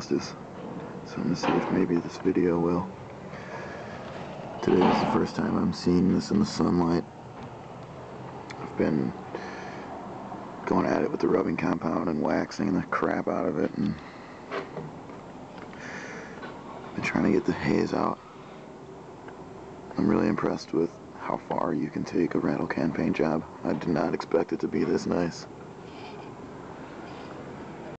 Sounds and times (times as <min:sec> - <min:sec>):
Speech: 0:00.0 - 0:00.4, 0:01.0 - 0:02.9, 0:04.6 - 0:07.1, 0:08.5 - 0:09.2, 0:10.6 - 0:14.0, 0:17.0 - 0:18.2, 0:19.9 - 0:25.5.